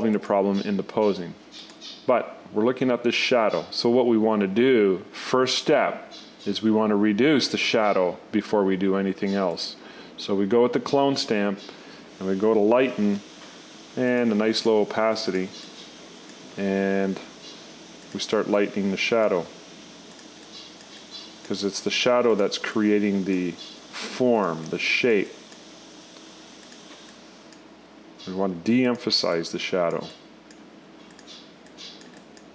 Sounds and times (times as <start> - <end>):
Speech: 0.0 - 1.4, 2.1 - 13.2, 14.0 - 15.6, 16.6 - 17.3, 18.2 - 19.6, 21.5 - 25.4, 28.2 - 30.2.